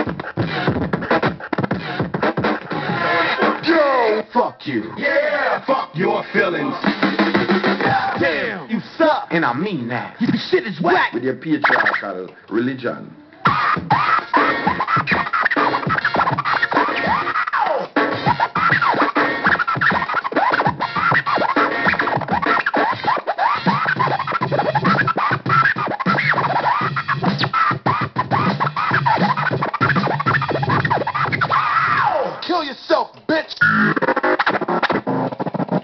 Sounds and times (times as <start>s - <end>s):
Scratching (performance technique): 0.0s - 8.6s, 10.2s - 12.2s, 13.4s - 32.6s, 33.5s - 35.8s
Hip hop music: 0.0s - 8.9s, 13.4s - 32.8s.